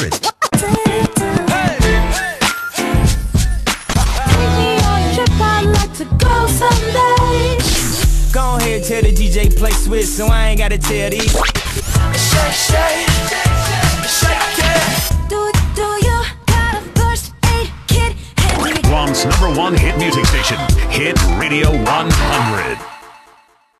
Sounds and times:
Music: 0:00.0 - 0:23.7
Speech: 0:18.5 - 0:22.8
Radio: 0:18.8 - 0:22.8.

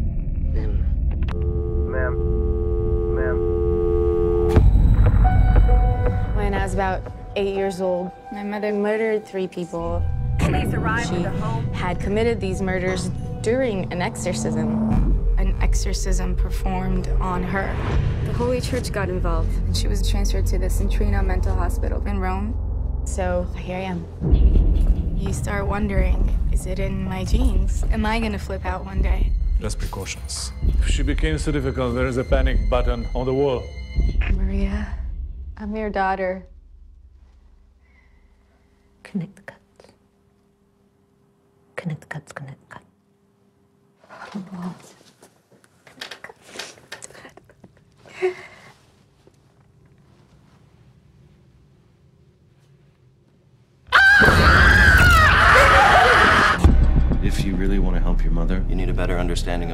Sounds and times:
Music: 0:00.0 - 0:37.9, 0:55.0 - 0:59.7.

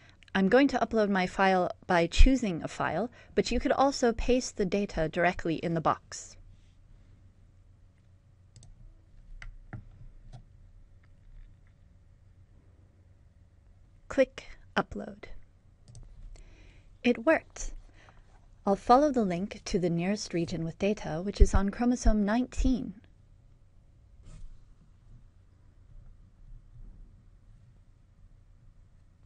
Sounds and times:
Speech: 0:00.3 - 0:06.4, 0:14.1 - 0:15.4, 0:17.1 - 0:17.8, 0:18.7 - 0:23.1.

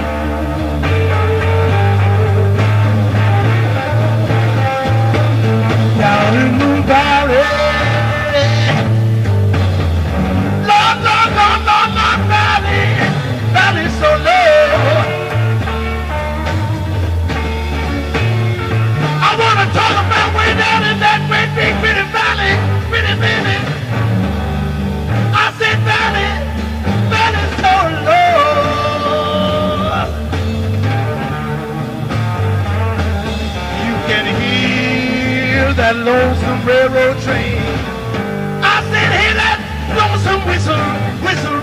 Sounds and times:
Blues: 0:00.0 - 0:41.6.

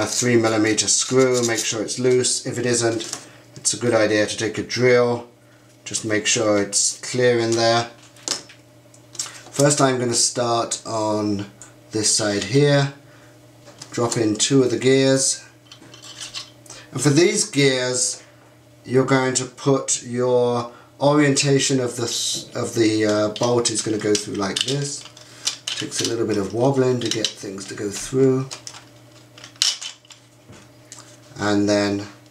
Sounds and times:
Speech: 0:00.0 - 0:05.3, 0:05.9 - 0:08.0, 0:09.5 - 0:13.0, 0:13.9 - 0:15.5, 0:16.9 - 0:18.2, 0:18.8 - 0:25.1, 0:25.8 - 0:28.6, 0:31.4 - 0:32.2.

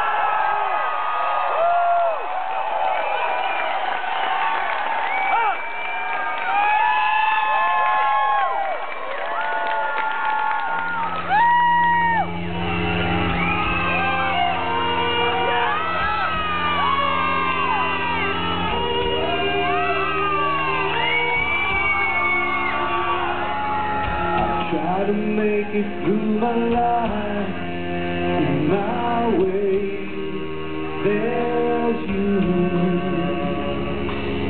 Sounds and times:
Shout: 0:00.0 - 0:12.3, 0:13.0 - 0:24.8
Inside, large room or hall: 0:00.0 - 0:34.5
Music: 0:01.4 - 0:34.5
Singing: 0:13.4 - 0:34.5.

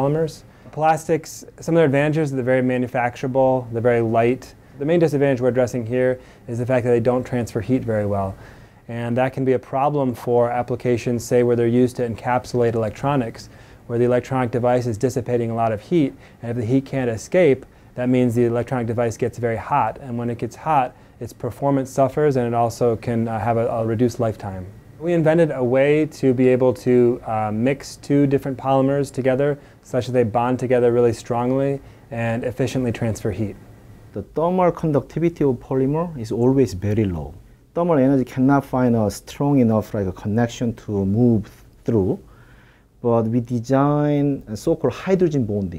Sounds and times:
Speech: 0:00.0 - 0:42.3, 0:43.0 - 0:45.7.

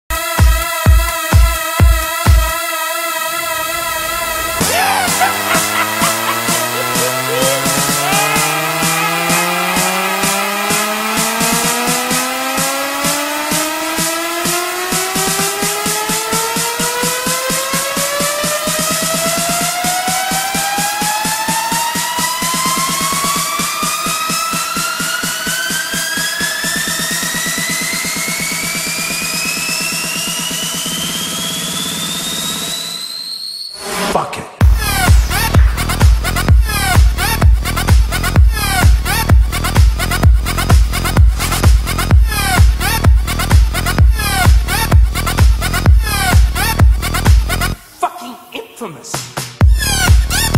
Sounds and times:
House music: 0:00.1 - 0:30.9, 0:34.2 - 0:50.5
Dance music: 0:00.1 - 0:31.4, 0:34.1 - 0:50.5.

